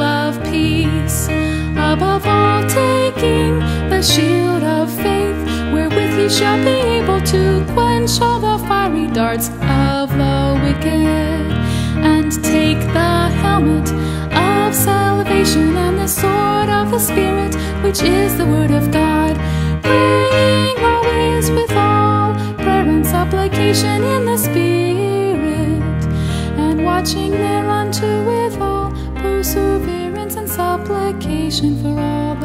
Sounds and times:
Music: 0.0s - 32.4s.

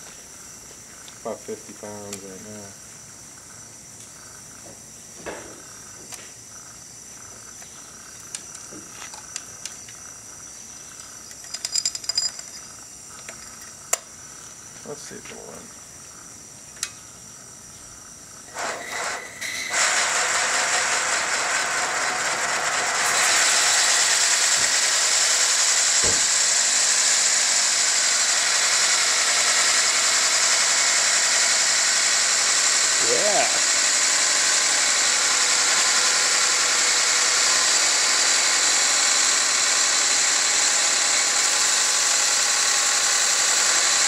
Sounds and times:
Speech: 1.2s - 2.8s, 14.8s - 15.7s, 33.0s - 33.7s
Steam: 18.5s - 44.0s.

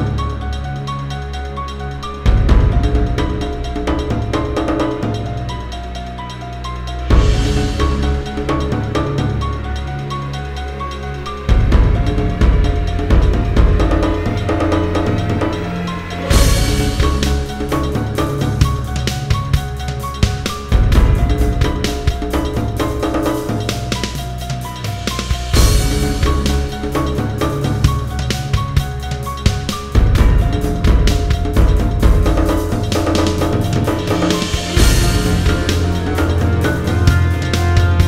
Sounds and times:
Music: 0.0s - 38.0s.

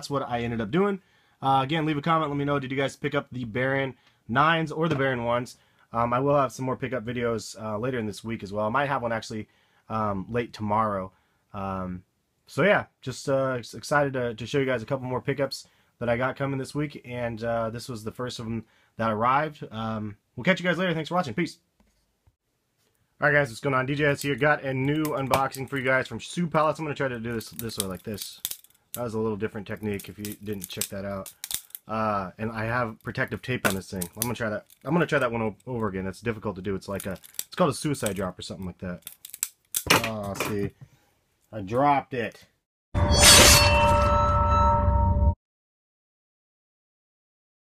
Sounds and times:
Speech: 0.0s - 21.6s, 23.2s - 28.4s, 29.0s - 31.3s, 31.9s - 39.0s, 39.9s - 40.8s, 41.5s - 42.5s.

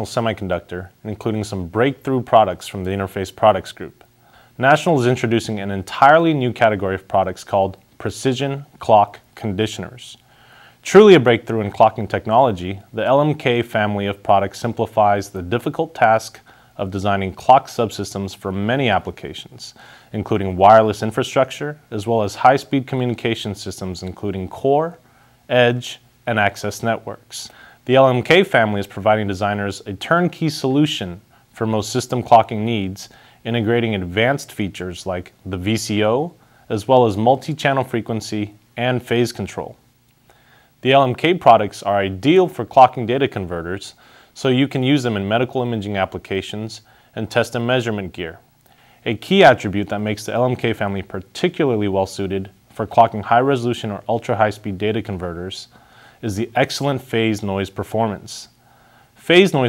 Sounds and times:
Speech: 0.0s - 10.2s, 10.8s - 39.8s, 40.8s - 58.6s, 59.2s - 59.6s.

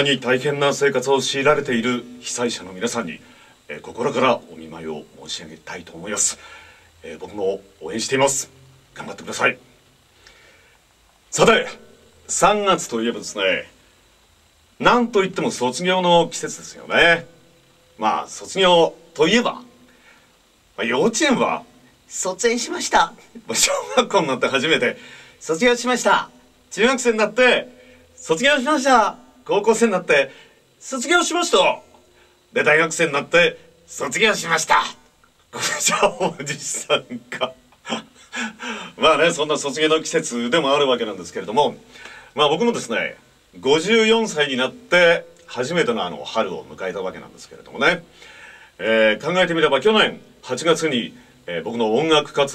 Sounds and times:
Speech: 0.0s - 6.4s, 7.0s - 9.7s, 11.3s - 13.8s, 14.8s - 17.4s, 18.0s - 19.8s, 20.8s - 48.1s, 48.8s - 52.5s.

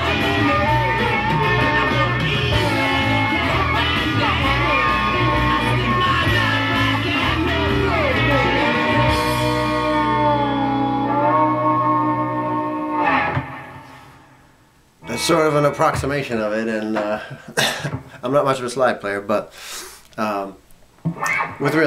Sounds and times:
Guitar: 0.0s - 18.1s, 21.0s - 21.8s
Inside, small room: 0.0s - 21.8s
Speech: 15.0s - 17.3s, 18.2s - 19.5s, 20.2s - 20.6s, 21.6s - 21.8s.

